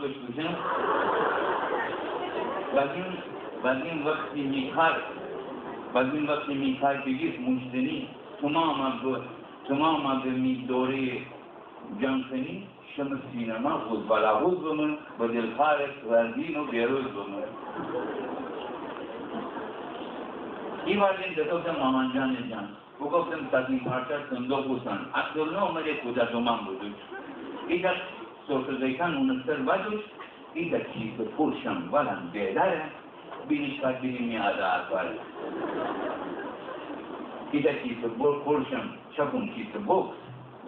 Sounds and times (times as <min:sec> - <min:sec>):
Speech: 0:00.0 - 0:00.8, 0:02.7 - 0:05.2, 0:06.0 - 0:11.3, 0:11.9 - 0:17.6, 0:20.9 - 0:35.2, 0:37.5 - 0:40.2
Inside, public space: 0:00.0 - 0:40.6.